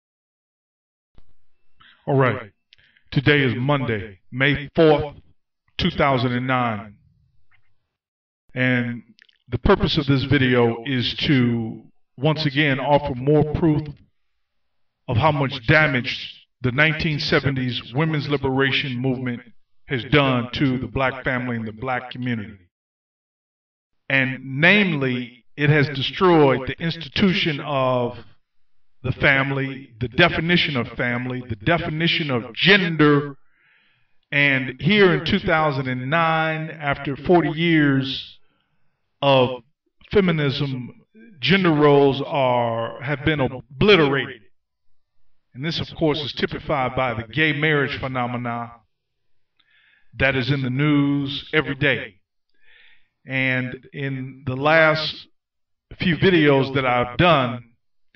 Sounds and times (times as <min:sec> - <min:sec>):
Speech: 0:01.9 - 0:05.2, 0:05.8 - 0:07.0, 0:08.5 - 0:14.0, 0:15.1 - 0:22.7, 0:24.1 - 0:28.4, 0:29.0 - 0:33.4, 0:34.3 - 0:38.4, 0:39.2 - 0:44.4, 0:45.5 - 0:48.8, 0:50.2 - 0:52.2, 0:53.3 - 0:55.3, 0:55.9 - 0:57.7.